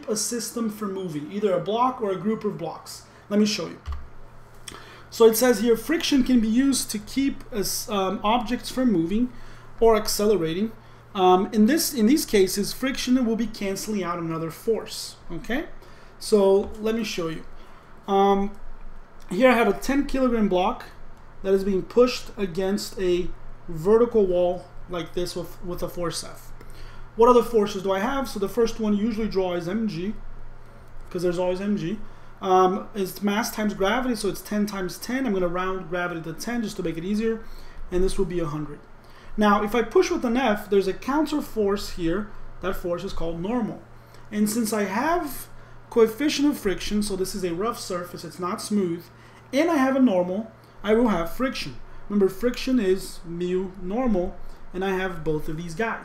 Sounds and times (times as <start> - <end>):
Speech: 0.0 - 4.0, 5.1 - 17.5, 18.1 - 18.6, 19.2 - 26.6, 27.2 - 30.2, 31.1 - 56.0.